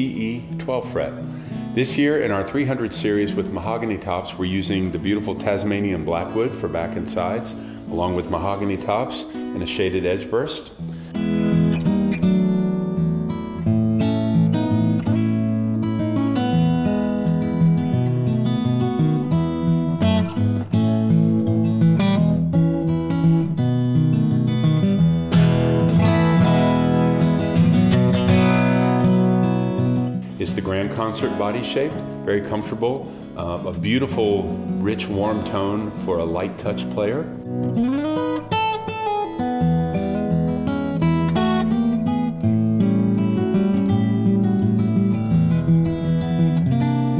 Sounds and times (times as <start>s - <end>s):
Speech: 0.0s - 1.2s, 1.8s - 10.8s, 30.4s - 37.4s
Acoustic guitar: 0.0s - 47.1s
Background music: 0.0s - 47.1s.